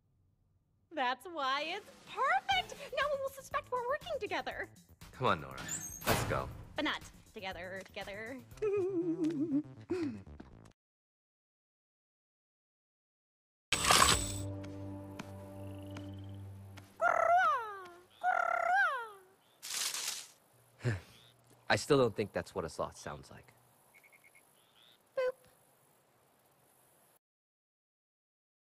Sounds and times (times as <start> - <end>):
Music: 2.1 - 10.8, 14.1 - 17.0.